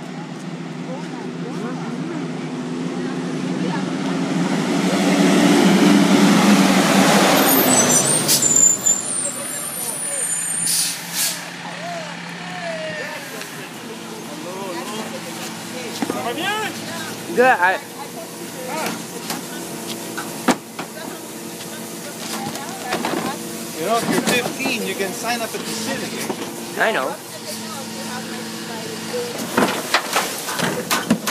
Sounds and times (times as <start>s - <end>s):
Truck: 0.0s - 31.3s.